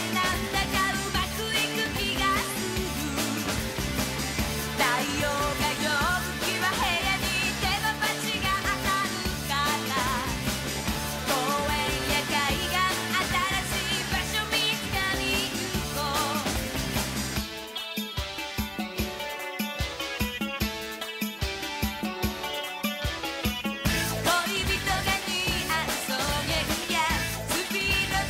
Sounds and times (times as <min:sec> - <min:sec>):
Music: 0:00.0 - 0:28.2.